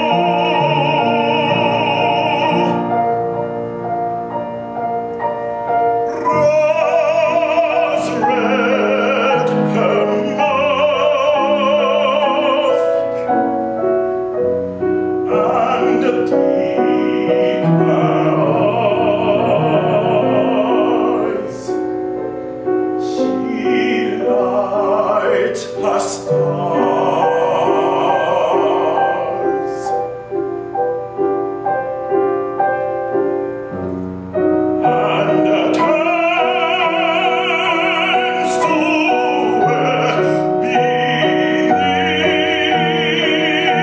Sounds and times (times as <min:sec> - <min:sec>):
Classical music: 0:00.0 - 0:43.8.